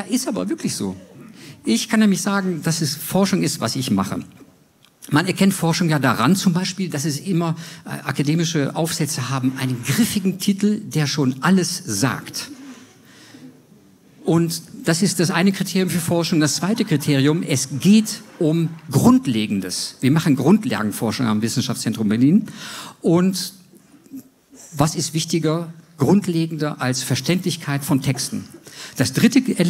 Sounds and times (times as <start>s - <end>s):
Speech: 0.0s - 4.4s, 5.0s - 12.5s, 14.2s - 23.6s, 24.7s - 29.7s.